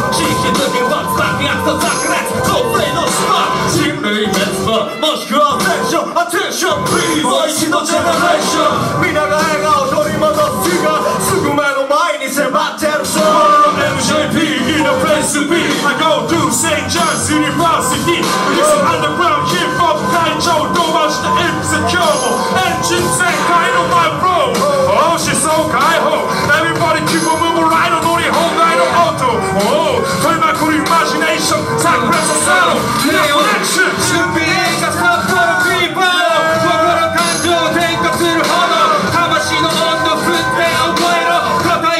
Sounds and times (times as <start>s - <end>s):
Music: 0.0s - 41.9s.